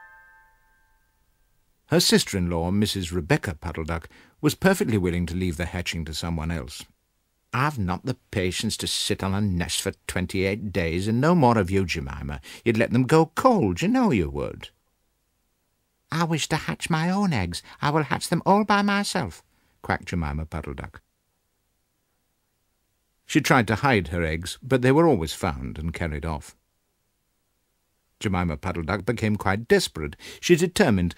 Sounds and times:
Speech: 1.9 - 14.8, 16.1 - 21.0, 23.3 - 26.6, 28.2 - 31.1.

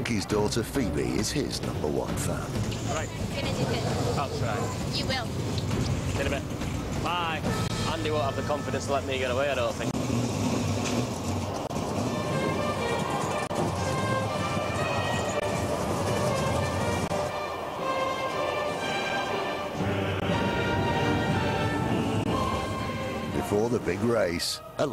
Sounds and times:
Music: 0.0 - 9.9, 11.7 - 24.9.

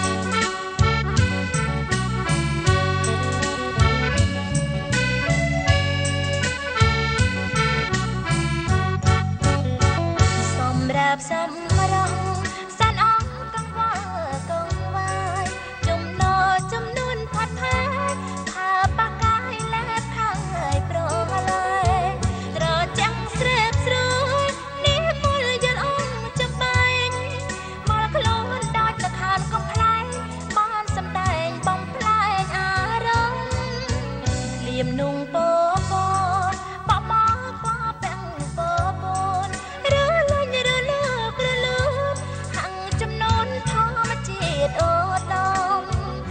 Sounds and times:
Music: 0.0 - 46.3.

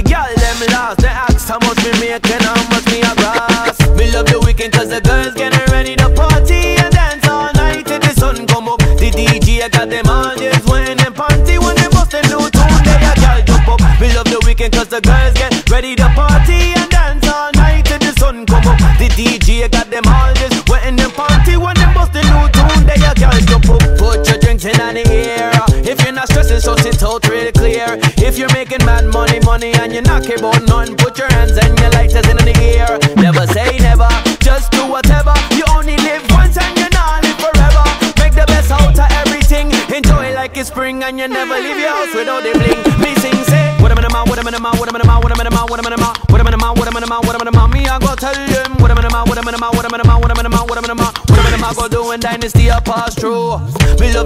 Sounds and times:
Hip hop music: 0.0 - 54.2
Pop music: 0.0 - 54.2
Rapping: 0.0 - 54.2.

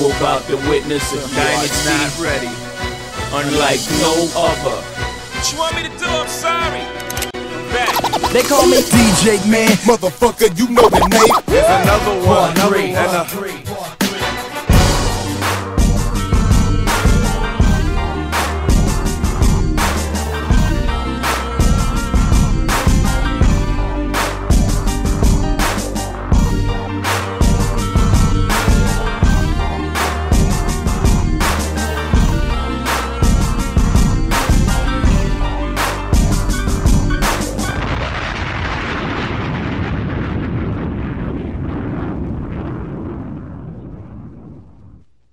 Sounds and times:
Music: 0.0 - 38.0.

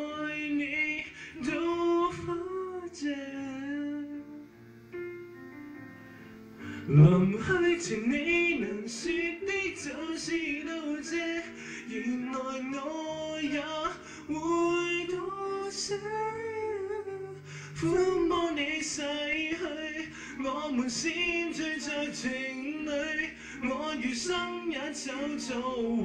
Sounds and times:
Male singing: 0.0 - 4.4, 6.9 - 26.0.

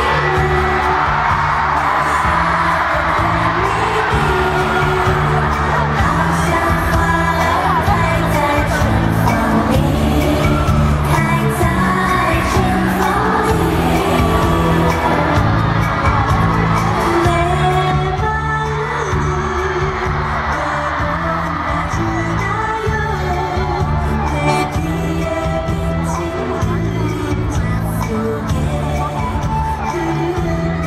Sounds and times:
Music: 0.0 - 30.8.

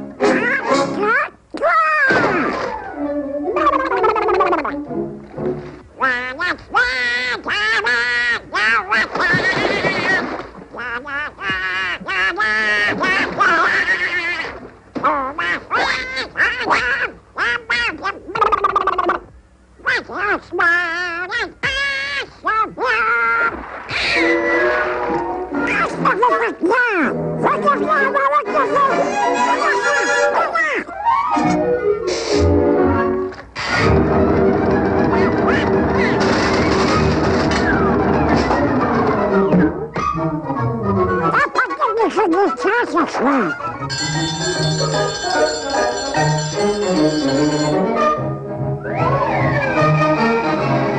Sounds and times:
Speech: 0.4 - 2.2, 19.8 - 23.6, 25.7 - 30.9, 41.2 - 43.6
Bell: 43.9 - 47.9.

